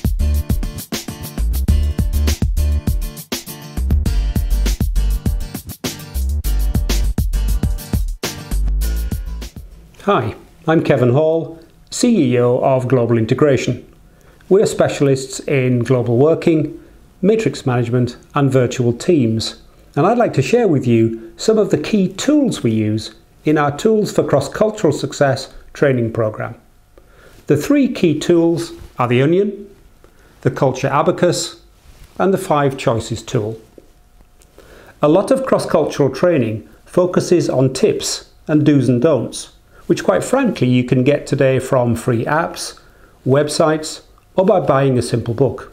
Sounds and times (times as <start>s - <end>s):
Speech: 10.0s - 13.9s, 14.5s - 26.6s, 27.5s - 29.8s, 30.4s - 33.7s, 35.0s - 45.7s.